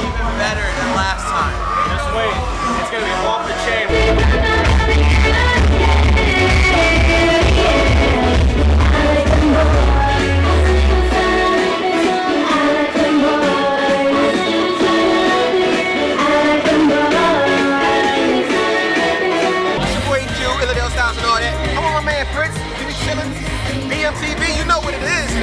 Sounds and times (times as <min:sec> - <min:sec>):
Vocal music: 0:00.0 - 0:25.4.